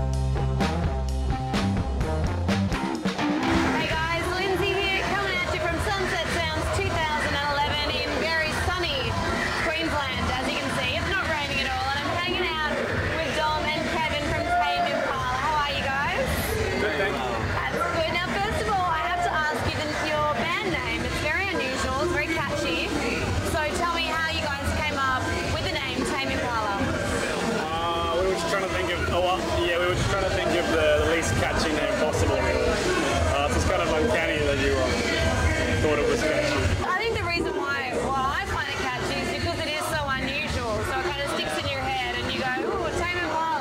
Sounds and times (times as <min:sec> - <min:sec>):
Crowd: 0:00.0 - 0:43.6.